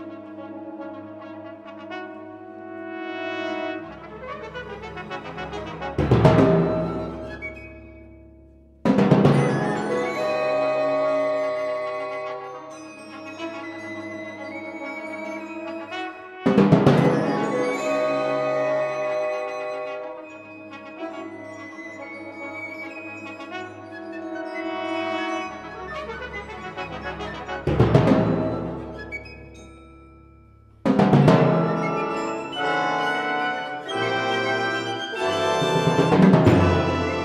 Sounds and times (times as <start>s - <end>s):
Orchestra: 0.0s - 37.2s.